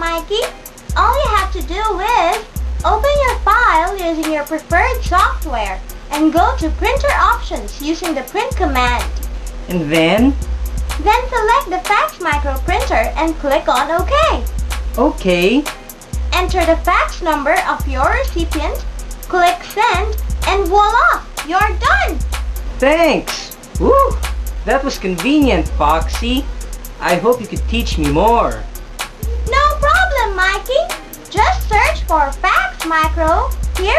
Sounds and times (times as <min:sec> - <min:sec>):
Speech: 0:00.0 - 0:09.0, 0:09.7 - 0:10.4, 0:11.0 - 0:14.4, 0:15.0 - 0:15.6, 0:16.3 - 0:22.1, 0:22.8 - 0:28.6, 0:29.5 - 0:33.9
Music: 0:00.0 - 0:33.9.